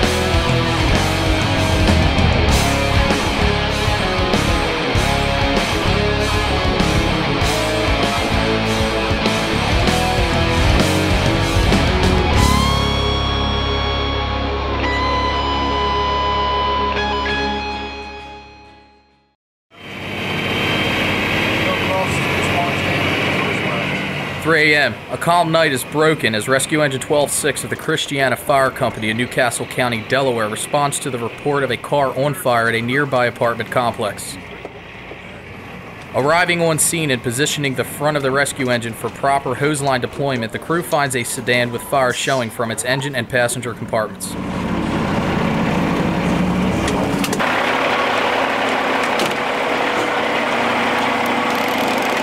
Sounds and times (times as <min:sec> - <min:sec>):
Speech: 0:21.6 - 0:34.4, 0:36.1 - 0:44.4.